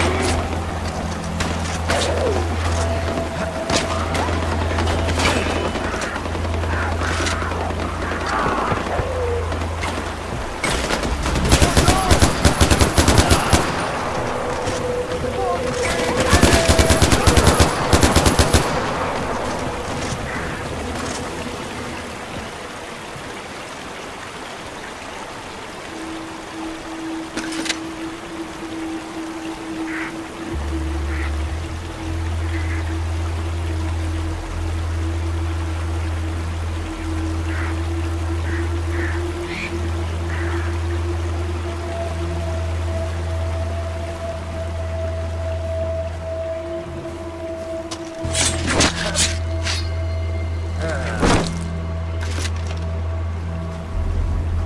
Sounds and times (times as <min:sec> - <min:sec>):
Music: 0:00.0 - 0:54.6
Outside, rural or natural: 0:00.0 - 0:54.6.